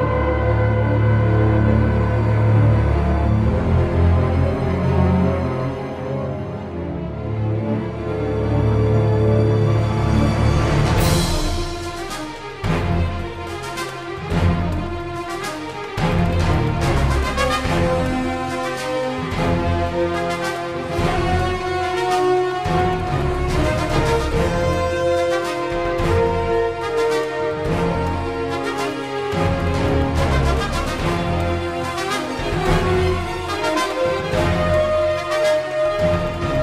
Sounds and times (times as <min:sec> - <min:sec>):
Theme music: 0:00.0 - 0:36.6.